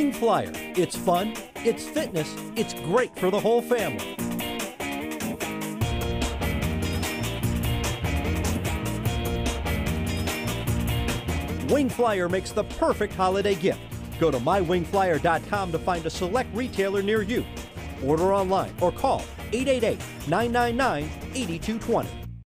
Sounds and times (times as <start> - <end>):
Speech: 0.0 - 4.0, 11.6 - 22.1
Music: 0.0 - 22.4.